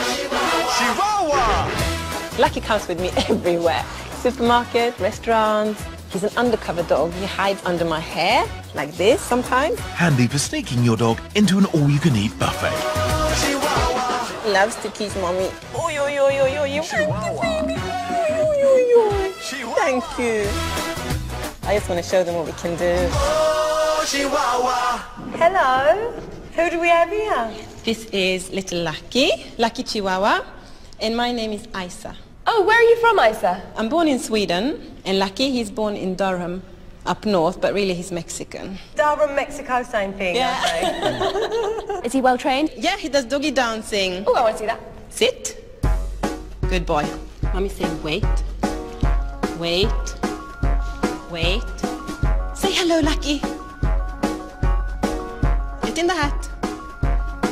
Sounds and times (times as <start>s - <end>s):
Music: 0.0s - 30.2s, 43.0s - 57.5s.